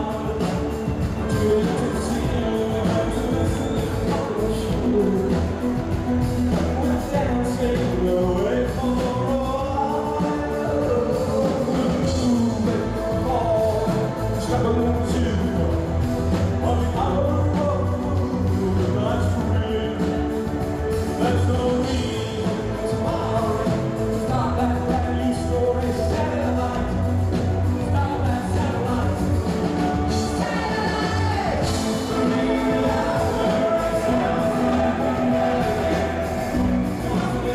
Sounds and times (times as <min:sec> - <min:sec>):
Music: 0:00.0 - 0:37.5.